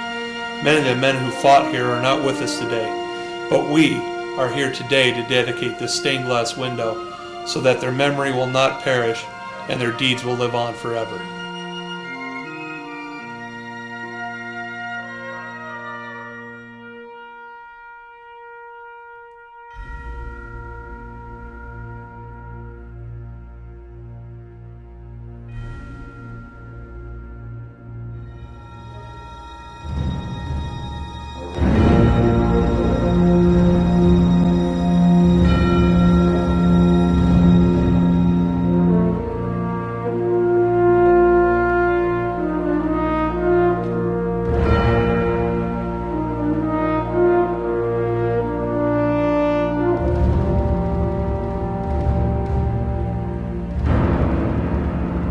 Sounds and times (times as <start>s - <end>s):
Theme music: 0.0s - 55.3s.